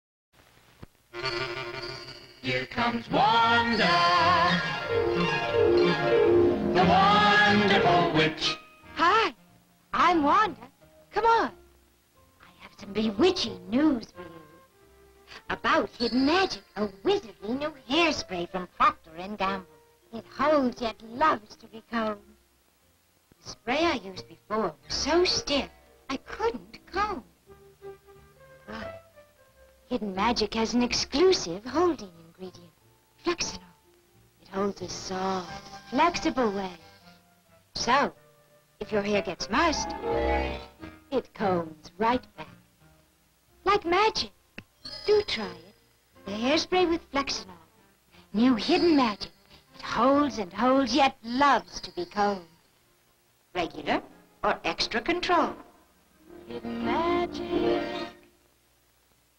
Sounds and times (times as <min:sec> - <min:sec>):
Music: 0:01.1 - 0:59.3
Speech: 0:08.4 - 0:09.4, 0:10.0 - 0:11.6, 0:12.4 - 0:14.6, 0:15.4 - 0:22.3, 0:23.4 - 0:27.3, 0:29.9 - 0:33.7, 0:34.4 - 0:36.8, 0:37.8 - 0:38.2, 0:38.8 - 0:40.0, 0:41.1 - 0:42.6, 0:43.6 - 0:44.4, 0:45.1 - 0:47.7, 0:48.4 - 0:52.5, 0:53.6 - 0:55.7.